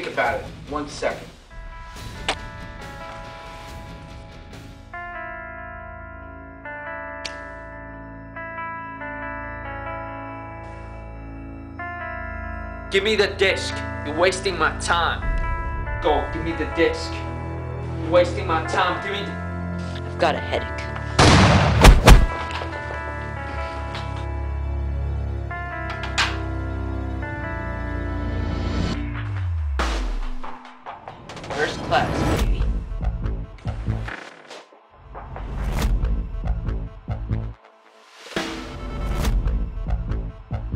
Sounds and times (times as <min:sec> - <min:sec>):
Music: 0:00.0 - 0:40.7.